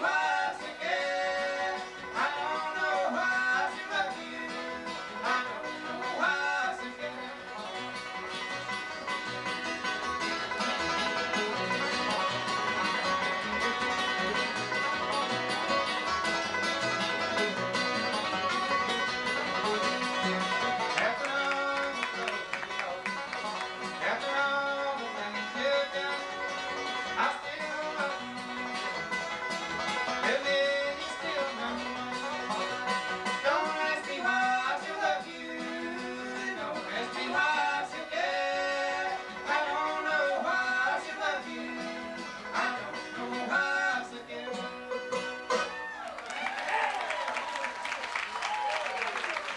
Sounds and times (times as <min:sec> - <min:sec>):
Banjo: 0:00.0 - 0:46.5
Acoustic guitar: 0:00.0 - 0:49.5.